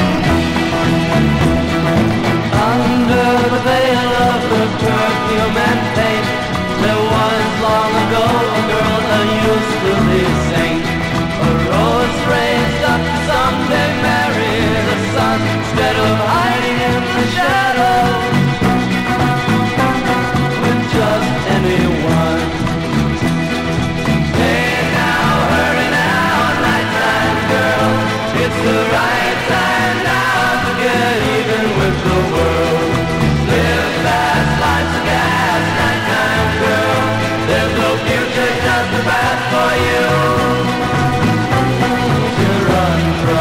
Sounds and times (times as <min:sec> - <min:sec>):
Psychedelic rock: 0:00.0 - 0:43.4.